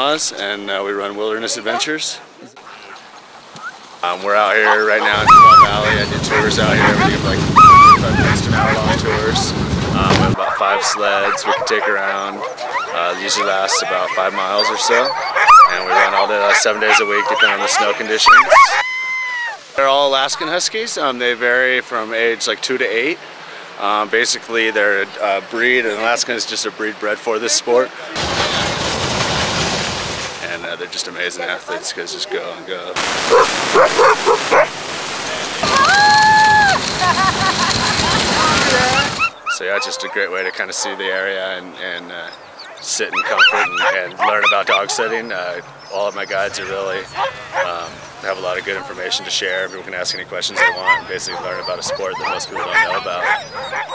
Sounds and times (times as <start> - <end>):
Speech: 0.0 - 2.6, 4.0 - 18.6, 19.8 - 23.2, 23.8 - 28.6, 30.4 - 33.0, 38.4 - 53.4
Bow-wow: 4.5 - 9.4, 10.3 - 19.6, 33.3 - 34.7, 42.7 - 45.2, 47.1 - 47.8, 50.6 - 53.9
Whimper (dog): 4.7 - 7.0, 7.6 - 8.3, 11.3 - 19.6, 43.2 - 45.1, 50.6 - 53.9
Yip: 7.6 - 8.0, 14.6 - 16.3, 16.9 - 18.9.